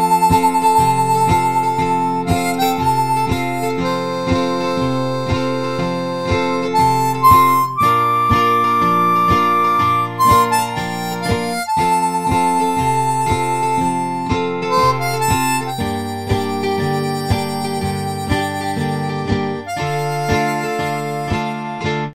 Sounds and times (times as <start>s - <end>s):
Harmonica: 0.0s - 22.1s
Wind instrument, woodwind instrument: 0.0s - 22.1s.